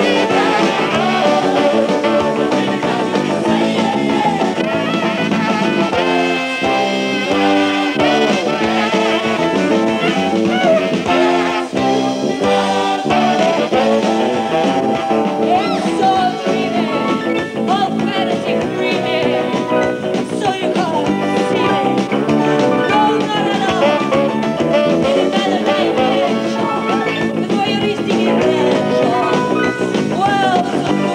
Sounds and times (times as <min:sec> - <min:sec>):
Singing: 0:00.0 - 0:14.6, 0:15.4 - 0:22.0, 0:22.8 - 0:31.1
Blues: 0:00.0 - 0:31.1.